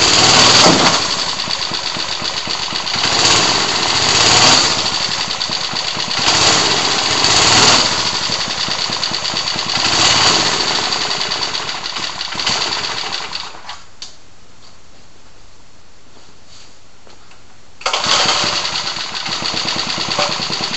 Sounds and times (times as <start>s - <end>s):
Accelerating, revving, vroom: 3.1s - 4.8s, 6.2s - 8.1s.